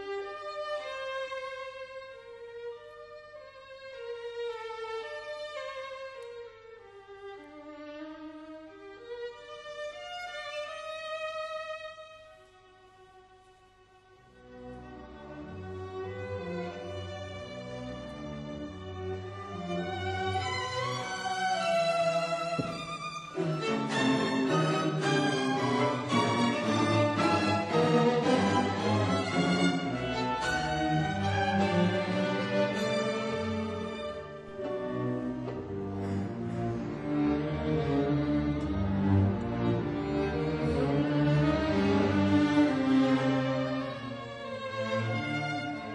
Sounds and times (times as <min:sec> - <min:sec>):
Violin, fiddle: 0:00.0 - 0:45.9.